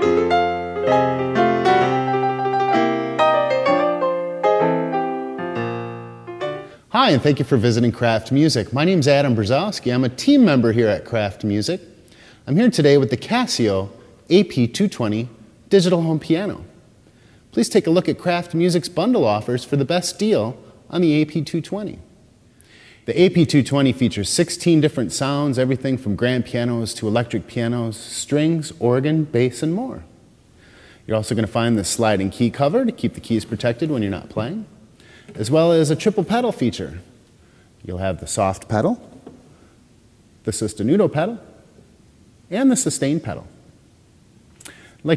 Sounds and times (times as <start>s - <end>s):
Speech: 6.9s - 16.8s, 17.6s - 22.1s, 23.0s - 30.1s, 31.1s - 34.7s, 35.3s - 37.1s, 37.8s - 39.2s, 40.4s - 41.6s, 42.5s - 43.6s.